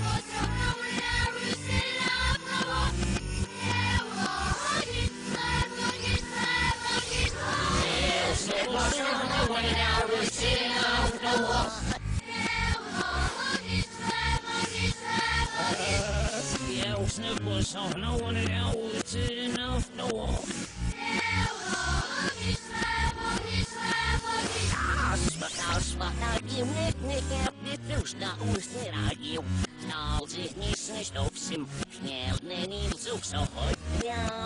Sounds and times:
Music: 0.0 - 34.4.

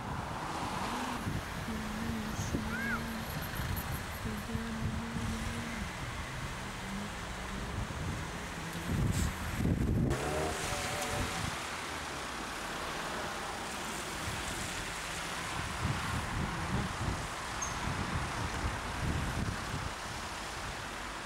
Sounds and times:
Wind noise (microphone): 0.0 - 6.6, 7.6 - 11.6, 15.5 - 20.9.

